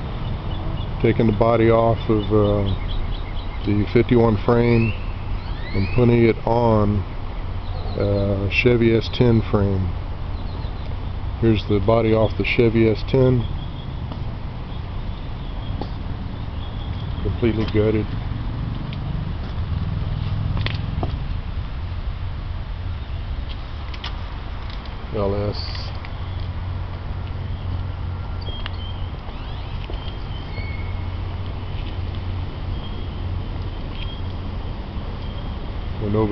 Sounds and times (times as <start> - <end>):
Vehicle: 0.0 - 36.3
Speech: 1.0 - 2.8, 3.7 - 5.0, 5.8 - 7.0, 7.9 - 10.0, 11.4 - 13.5, 17.2 - 18.1, 25.1 - 26.0, 36.0 - 36.3.